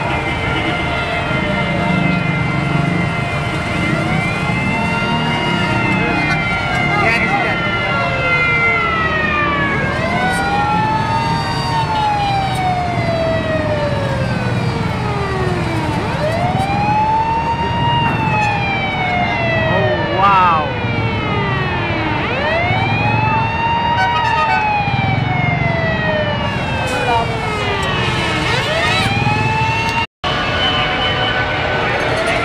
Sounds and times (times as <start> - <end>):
Ambulance (siren): 0.0 - 32.4.